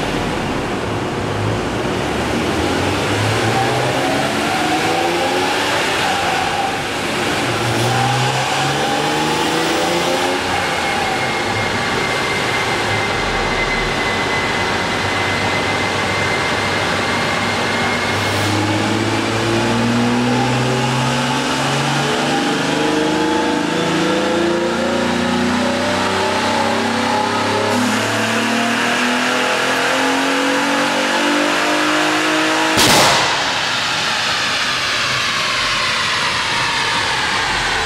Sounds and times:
Car: 0.0s - 37.8s
Medium engine (mid frequency): 0.0s - 37.8s.

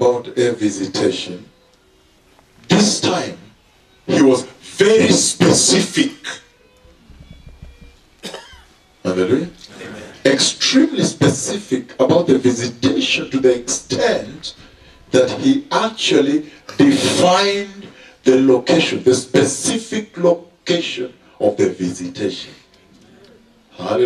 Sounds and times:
Speech: 0.0s - 1.5s, 2.7s - 3.5s, 4.1s - 6.5s, 9.1s - 22.7s, 23.7s - 24.0s.

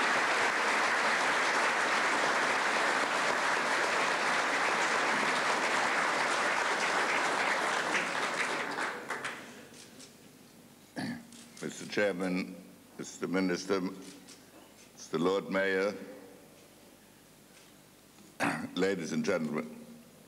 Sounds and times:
Narration, monologue: 11.0s - 16.7s, 18.2s - 20.2s
Male speech, man speaking: 11.6s - 14.0s, 15.0s - 16.2s, 18.4s - 19.8s.

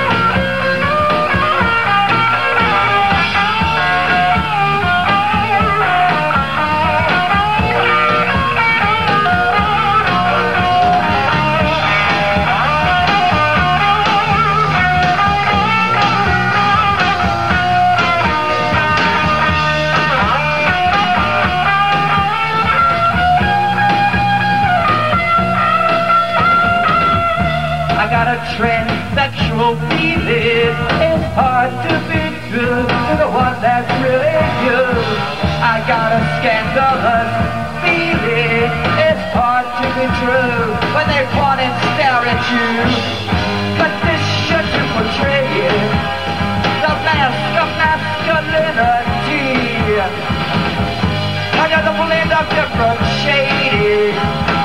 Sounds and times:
Rock and roll: 0.0s - 54.6s
Singing: 28.0s - 43.0s.

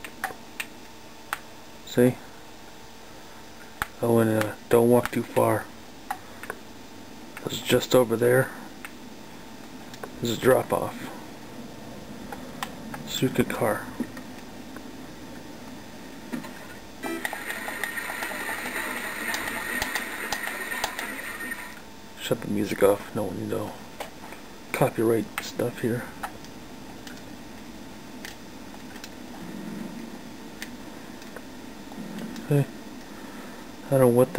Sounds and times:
Speech: 1.8s - 2.3s, 4.0s - 5.7s, 7.4s - 8.6s, 10.2s - 11.2s, 13.1s - 14.0s, 22.2s - 23.8s, 24.7s - 26.2s, 32.5s - 32.7s, 33.9s - 34.3s.

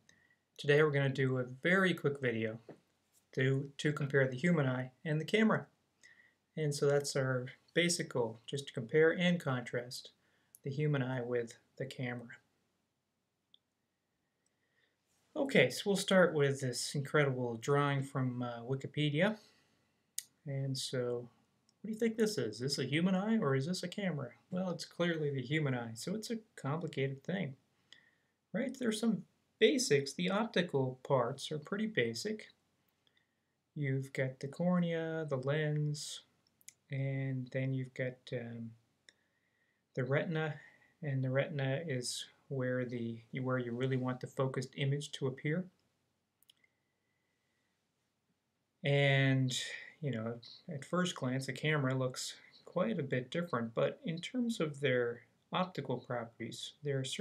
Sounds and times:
Speech: 0.6s - 2.8s, 3.4s - 5.7s, 6.6s - 12.5s, 15.4s - 19.4s, 20.2s - 27.6s, 28.5s - 32.6s, 33.8s - 38.8s, 40.0s - 45.8s, 48.8s - 57.2s.

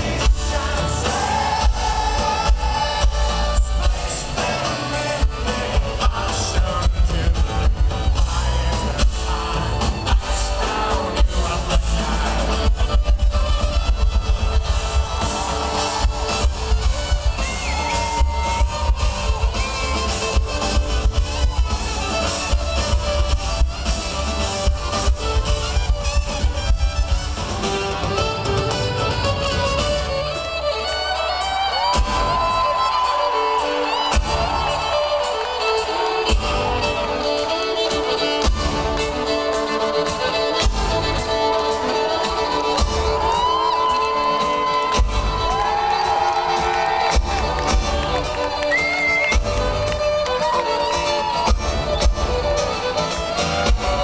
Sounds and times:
Violin, fiddle: 0.0s - 54.0s.

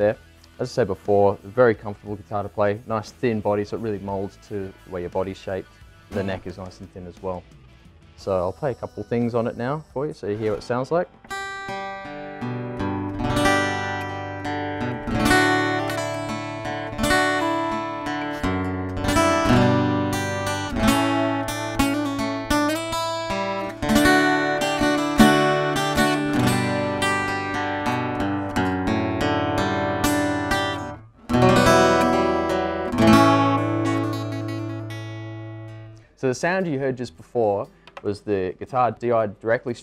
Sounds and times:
Speech: 0.0s - 7.5s, 8.2s - 11.1s, 36.2s - 39.8s
Acoustic guitar: 10.4s - 36.2s.

